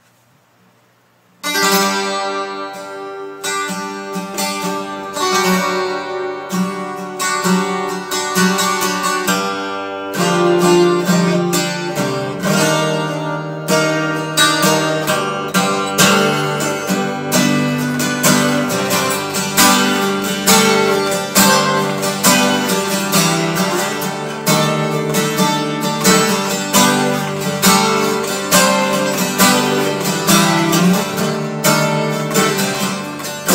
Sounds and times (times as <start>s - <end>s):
Music: 1.4s - 33.5s.